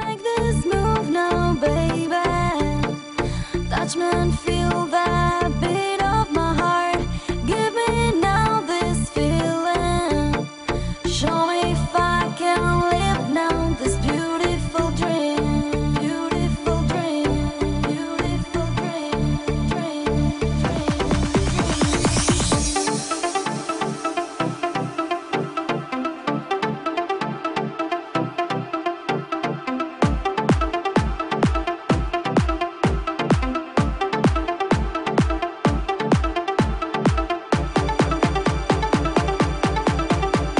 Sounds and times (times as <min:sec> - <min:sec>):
Music: 0:00.0 - 0:40.6.